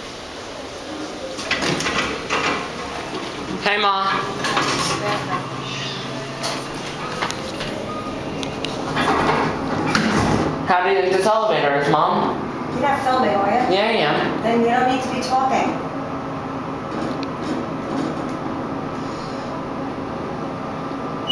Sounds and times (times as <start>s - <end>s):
Speech: 10.7s - 15.8s.